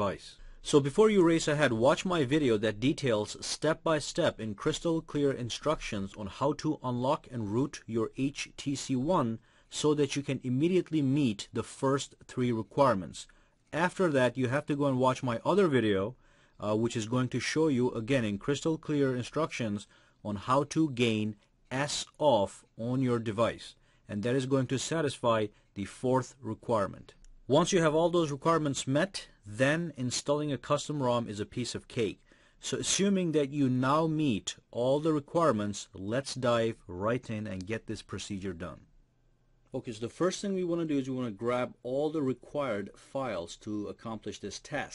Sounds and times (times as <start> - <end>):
Speech: 0.0 - 38.9, 39.7 - 44.9.